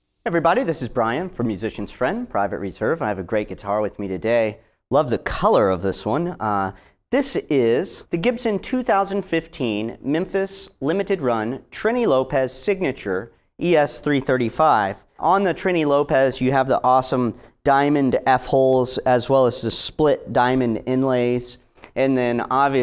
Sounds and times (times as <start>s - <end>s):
Speech: 0.3s - 22.8s.